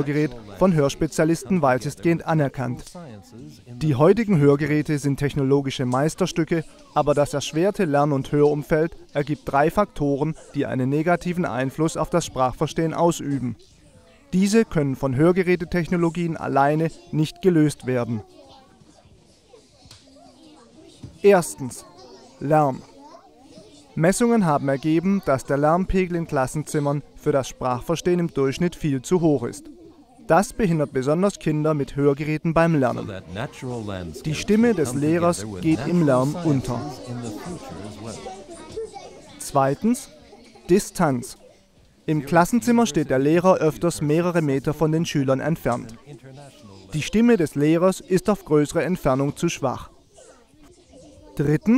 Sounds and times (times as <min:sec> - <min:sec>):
Male speech, man speaking: 0:00.0 - 0:13.6, 0:14.3 - 0:18.3, 0:21.2 - 0:23.0, 0:24.0 - 0:29.7, 0:30.3 - 0:38.5, 0:39.4 - 0:41.4, 0:42.1 - 0:49.9, 0:51.4 - 0:51.7
Narration, monologue: 0:00.0 - 0:51.7.